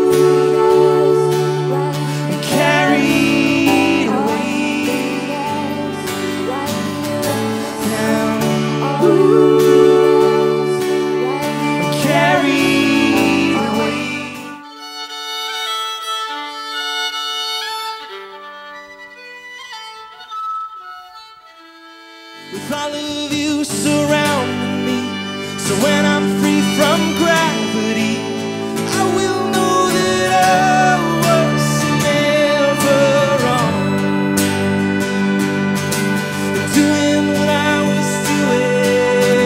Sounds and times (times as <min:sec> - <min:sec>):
Tender music: 0:00.0 - 0:39.4.